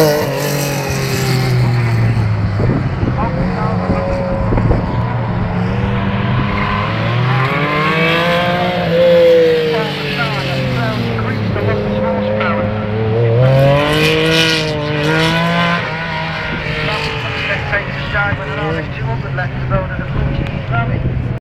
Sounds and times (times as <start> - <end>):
Car: 0.0 - 21.4
Speech: 3.1 - 4.3, 9.7 - 13.6, 16.7 - 21.4.